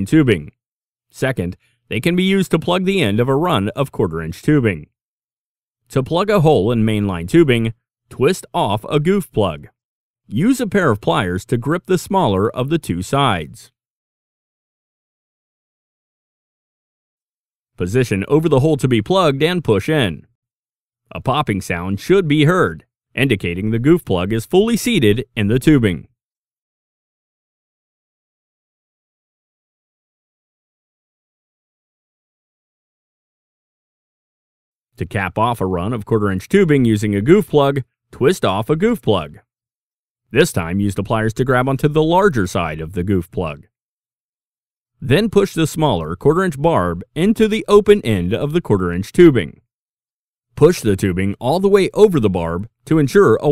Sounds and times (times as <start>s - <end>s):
Speech: 0.0s - 0.6s, 1.2s - 5.0s, 5.9s - 13.8s, 17.8s - 20.3s, 21.1s - 26.1s, 35.0s - 39.5s, 40.4s - 43.7s, 45.0s - 49.6s, 50.6s - 53.5s.